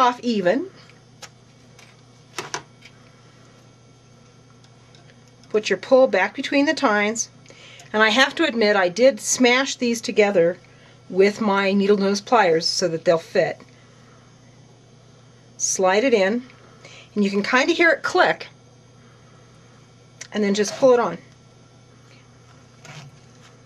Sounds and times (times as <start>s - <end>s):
Speech: 0.0s - 0.7s, 5.5s - 7.3s, 7.9s - 13.6s, 15.6s - 16.5s, 17.2s - 18.5s, 20.2s - 21.3s.